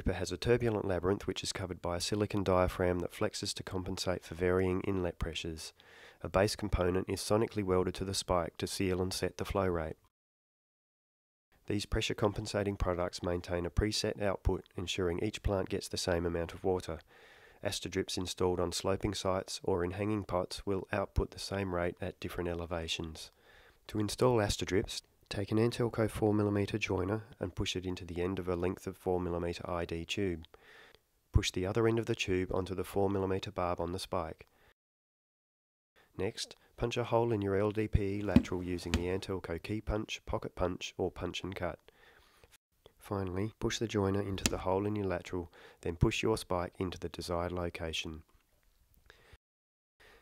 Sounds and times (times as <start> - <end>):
Speech: 0.0 - 10.1, 11.7 - 23.3, 23.9 - 30.5, 31.3 - 34.5, 36.2 - 41.8, 43.0 - 48.3.